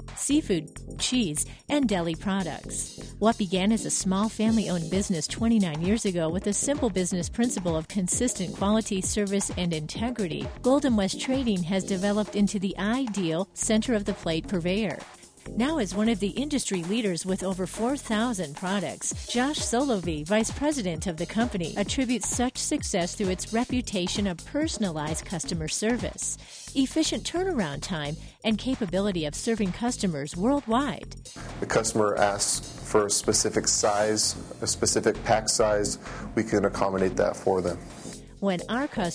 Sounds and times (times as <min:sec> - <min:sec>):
Music: 0:00.0 - 0:39.1
Speech: 0:00.2 - 0:15.0, 0:15.6 - 0:37.8, 0:38.4 - 0:39.1.